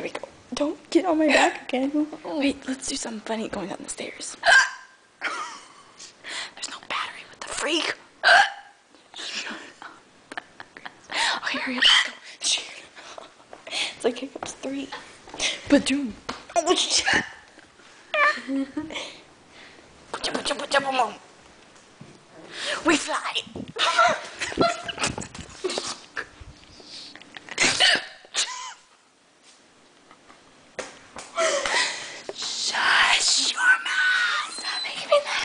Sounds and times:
Speech: 0:00.0 - 0:04.4, 0:07.4 - 0:08.0, 0:14.0 - 0:15.0, 0:20.2 - 0:21.2
Hiccup: 0:04.4 - 0:05.0, 0:08.2 - 0:08.8.

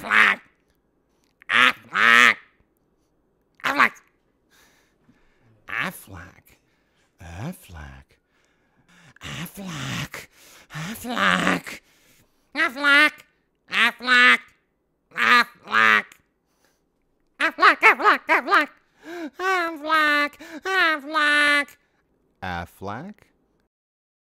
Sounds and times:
Quack: 0:00.0 - 0:00.5, 0:01.5 - 0:02.5, 0:03.6 - 0:04.0, 0:12.6 - 0:14.5, 0:15.2 - 0:16.2
Speech: 0:05.7 - 0:06.6, 0:07.2 - 0:08.2, 0:17.4 - 0:18.8, 0:19.4 - 0:21.8, 0:22.4 - 0:23.4.

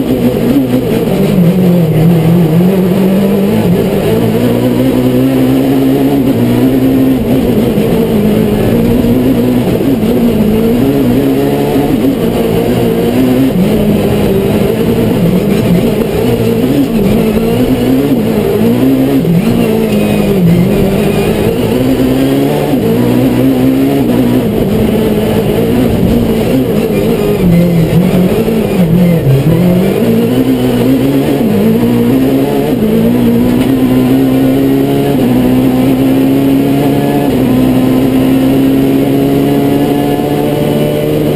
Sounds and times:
Car: 0:00.0 - 0:41.3.

